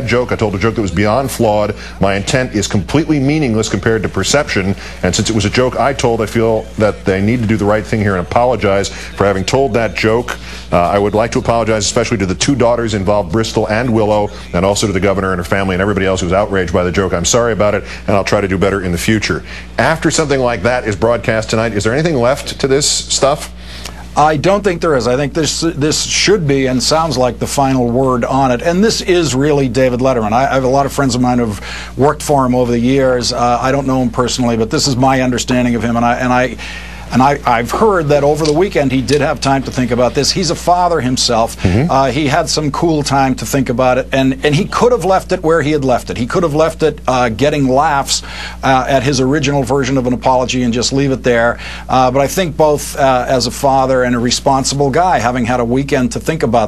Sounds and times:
Speech: 0.0s - 23.6s, 24.2s - 56.6s.

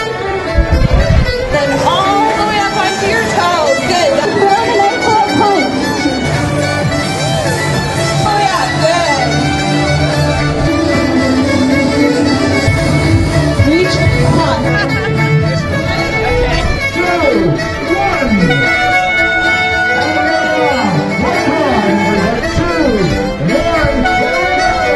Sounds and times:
Music: 0.0s - 24.9s
Outside, urban or manmade: 0.0s - 24.9s.

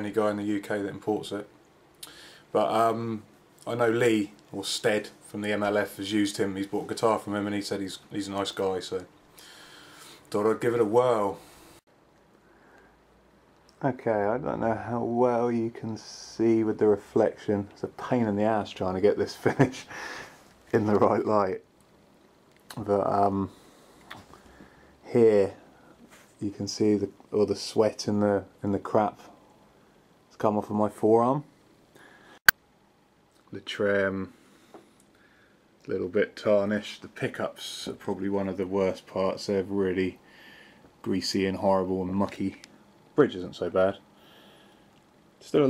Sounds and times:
Speech: 0.0s - 1.5s, 2.5s - 9.1s, 10.3s - 11.4s, 13.7s - 19.9s, 20.7s - 21.7s, 22.7s - 23.6s, 25.0s - 25.7s, 26.4s - 29.4s, 30.3s - 31.5s, 33.4s - 34.4s, 35.8s - 40.2s, 41.0s - 44.0s, 45.4s - 45.6s.

